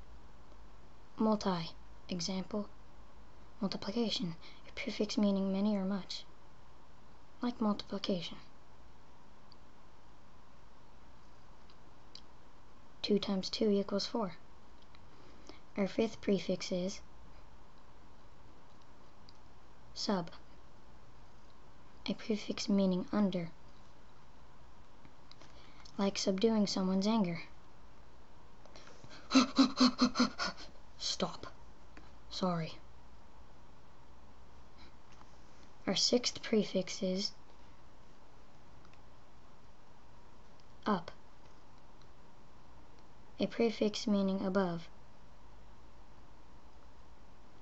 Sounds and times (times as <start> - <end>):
Inside, small room: 0.0 - 47.6
Speech: 1.2 - 2.7, 3.6 - 6.3, 7.4 - 8.5, 13.0 - 14.4, 15.8 - 17.0, 20.0 - 20.4, 22.0 - 23.6, 26.0 - 27.5, 31.0 - 31.6, 32.3 - 32.8, 35.8 - 37.4, 40.8 - 41.2, 43.4 - 44.9.